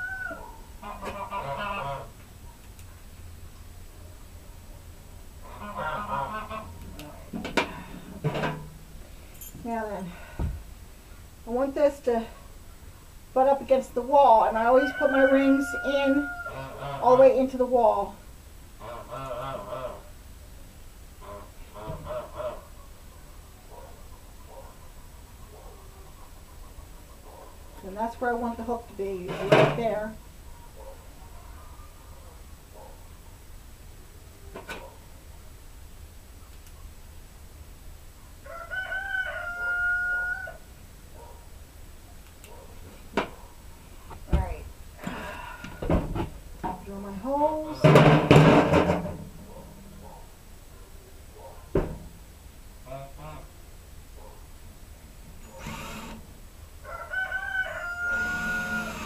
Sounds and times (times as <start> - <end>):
Crowing, cock-a-doodle-doo: 0.0 - 0.6, 14.7 - 16.8, 38.4 - 40.7, 56.8 - 59.0.